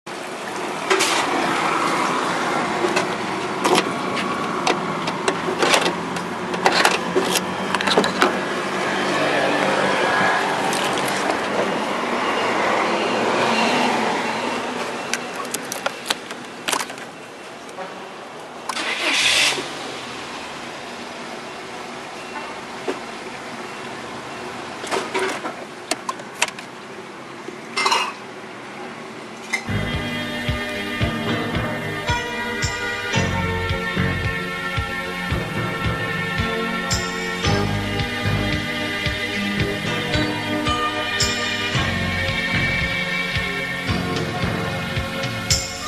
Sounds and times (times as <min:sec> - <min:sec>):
Car: 0:00.1 - 0:30.4.